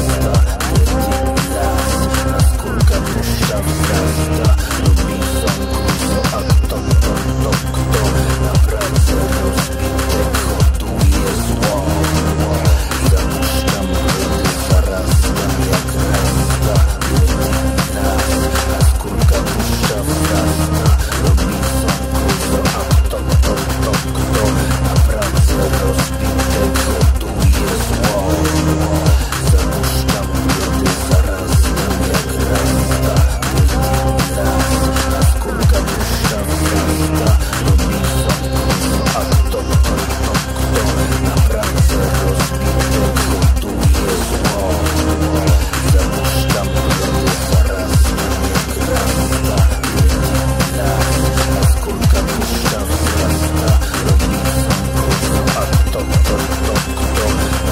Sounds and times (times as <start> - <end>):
Techno: 0.0 - 57.7.